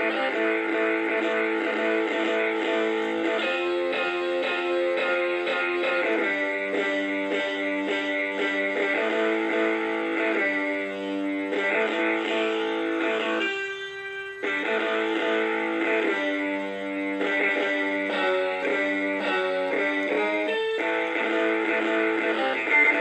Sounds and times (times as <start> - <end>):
Strum: 0.0 - 23.0.